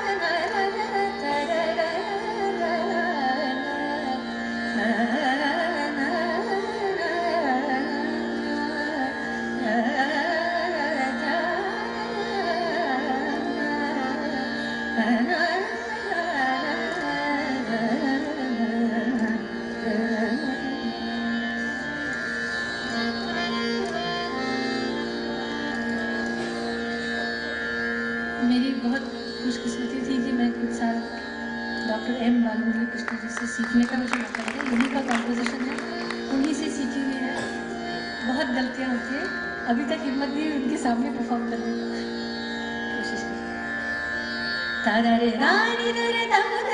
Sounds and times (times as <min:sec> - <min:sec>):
Carnatic music: 0:00.0 - 0:46.7.